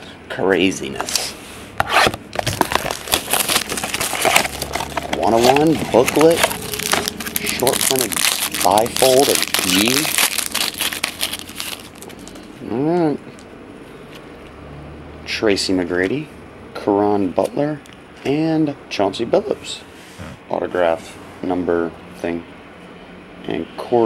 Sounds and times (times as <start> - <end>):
Crackle: 2.5 - 12.4.